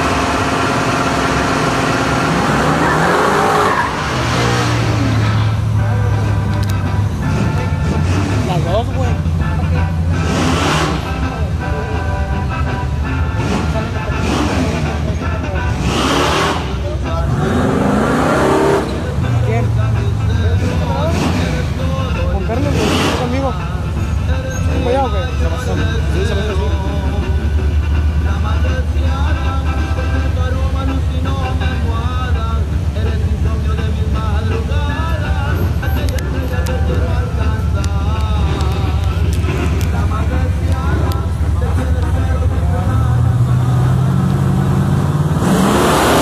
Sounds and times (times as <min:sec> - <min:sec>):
Vehicle: 0:00.0 - 0:46.2
Music: 0:05.5 - 0:44.9
Speech: 0:08.5 - 0:10.0, 0:19.1 - 0:23.8, 0:24.7 - 0:27.2.